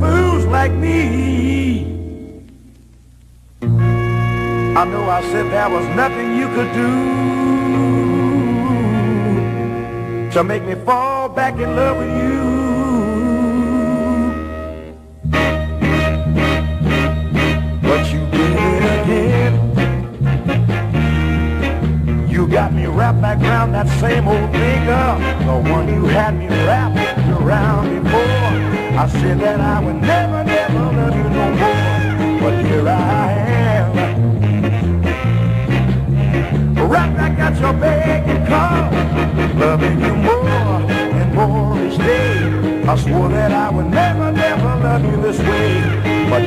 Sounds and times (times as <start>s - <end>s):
Electric guitar: 0.0s - 46.4s.